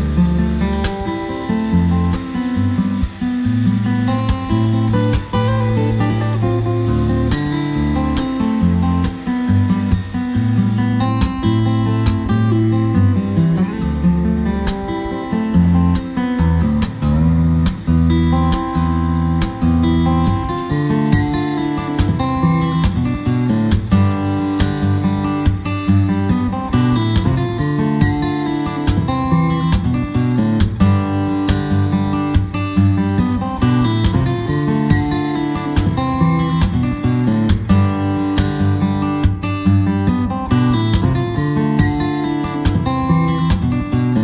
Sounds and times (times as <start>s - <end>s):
Acoustic guitar: 0.0s - 44.2s.